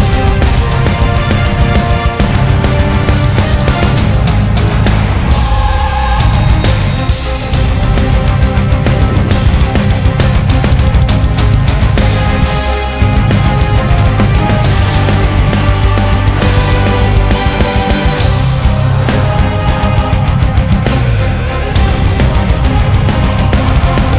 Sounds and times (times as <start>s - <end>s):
Music: 0.0s - 24.1s.